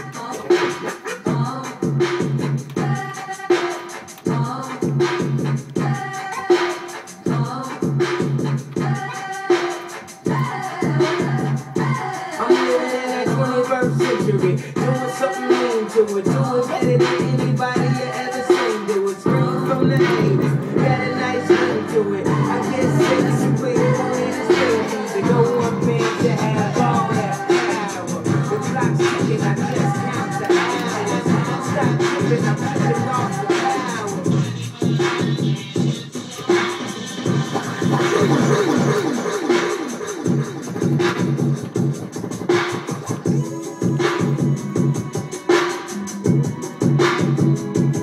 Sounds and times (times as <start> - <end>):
Electronic music: 0.0 - 48.0
Scratching (performance technique): 0.0 - 48.0.